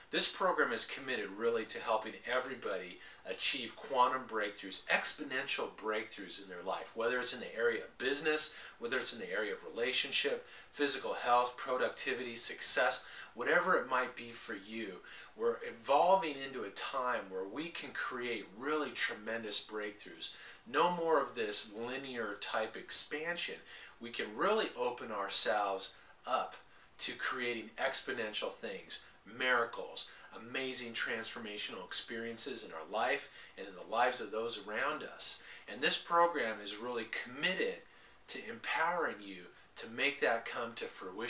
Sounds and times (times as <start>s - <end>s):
Speech: 0.1s - 41.3s.